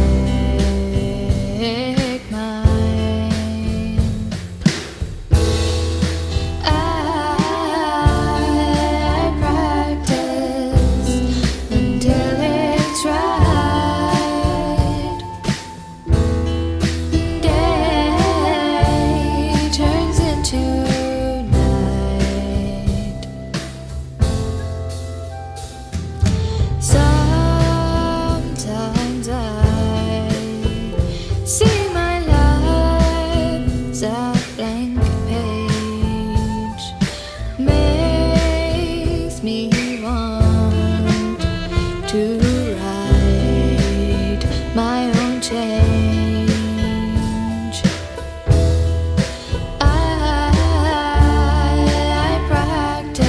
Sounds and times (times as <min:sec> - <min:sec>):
Blues: 0:00.0 - 0:53.2.